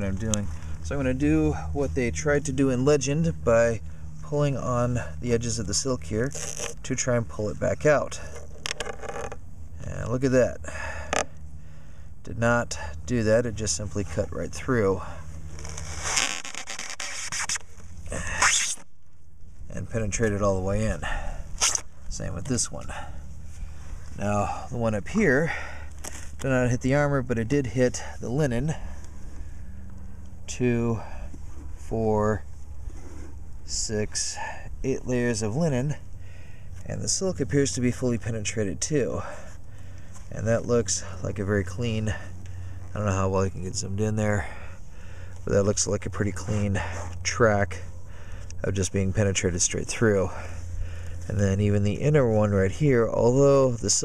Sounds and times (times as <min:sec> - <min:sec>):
Speech: 0:00.0 - 0:08.3, 0:09.8 - 0:10.6, 0:12.3 - 0:15.2, 0:19.7 - 0:21.2, 0:22.1 - 0:23.1, 0:24.2 - 0:25.6, 0:26.4 - 0:28.8, 0:30.5 - 0:31.2, 0:31.8 - 0:32.4, 0:33.7 - 0:36.0, 0:36.8 - 0:39.4, 0:40.3 - 0:42.3, 0:42.9 - 0:44.6, 0:45.5 - 0:47.9, 0:48.6 - 0:50.5, 0:51.3 - 0:54.0.